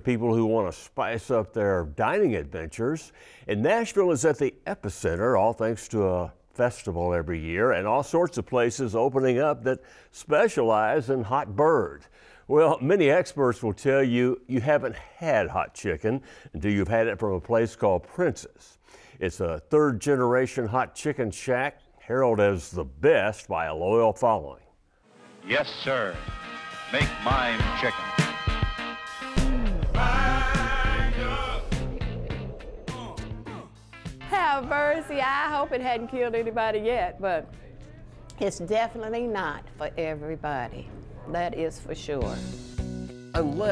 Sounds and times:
Music: 0:25.0 - 0:38.8, 0:42.0 - 0:43.7.

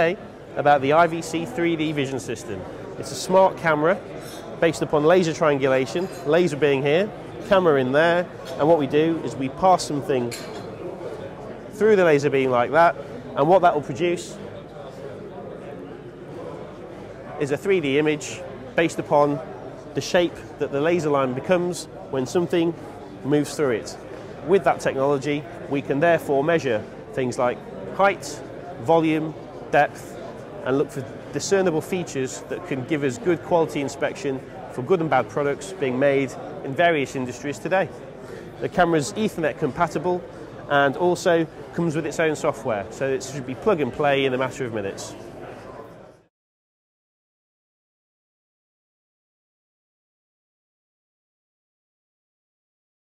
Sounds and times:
Speech: 0:00.0 - 0:45.9.

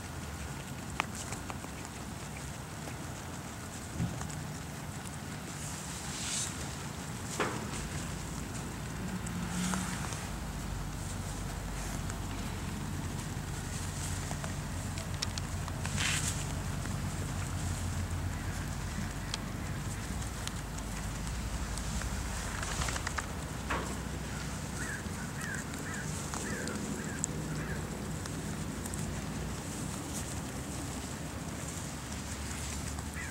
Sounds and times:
Outside, rural or natural: 0:00.0 - 0:33.3.

